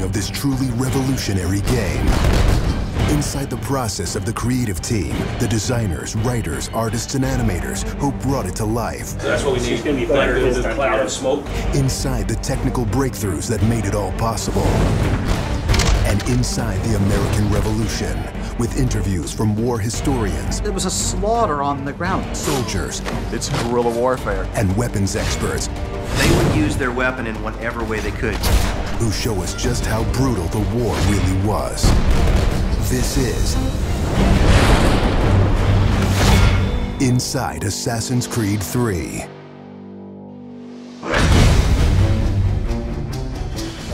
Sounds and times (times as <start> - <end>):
Music: 0.0 - 43.9
Speech: 3.1 - 14.8, 16.0 - 28.4, 37.0 - 39.3.